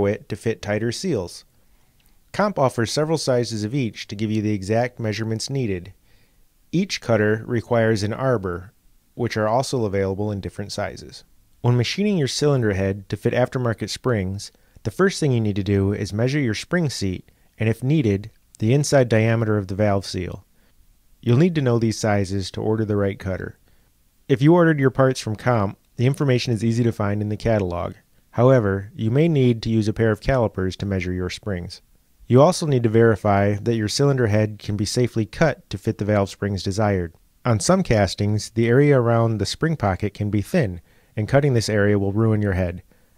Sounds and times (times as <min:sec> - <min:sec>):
Speech: 0:00.0 - 0:01.5, 0:02.3 - 0:06.0, 0:06.7 - 0:20.5, 0:21.2 - 0:23.6, 0:24.3 - 0:42.9.